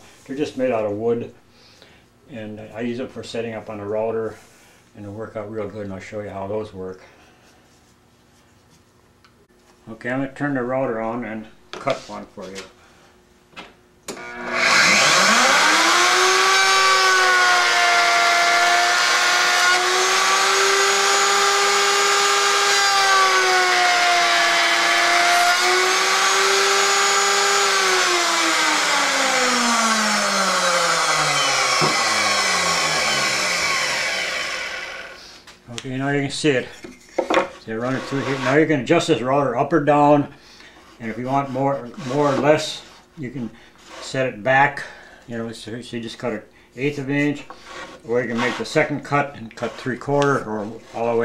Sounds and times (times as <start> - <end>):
Speech: 0.3 - 1.4, 2.3 - 4.4, 5.0 - 7.1, 9.8 - 12.8, 35.7 - 36.8, 37.6 - 40.4, 41.0 - 51.2.